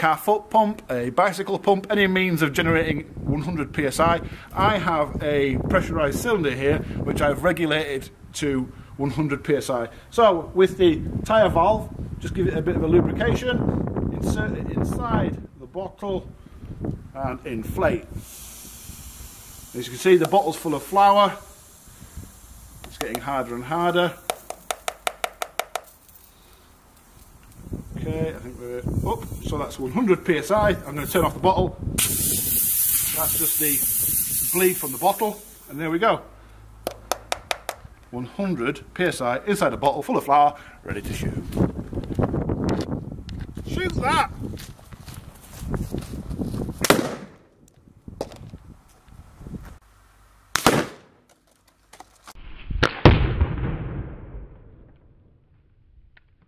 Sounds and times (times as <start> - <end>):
Outside, rural or natural: 0.0 - 56.4
Firecracker: 18.2 - 20.6, 32.0 - 35.7, 46.8 - 47.4, 50.6 - 51.2, 52.4 - 55.4.